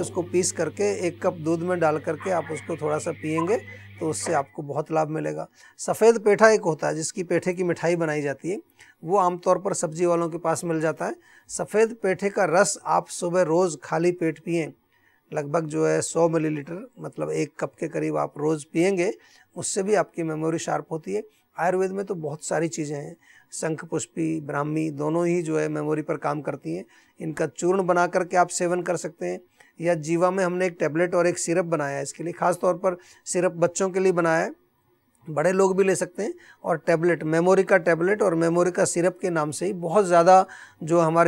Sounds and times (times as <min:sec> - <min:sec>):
Speech: 0:00.0 - 0:34.6, 0:35.2 - 0:41.2.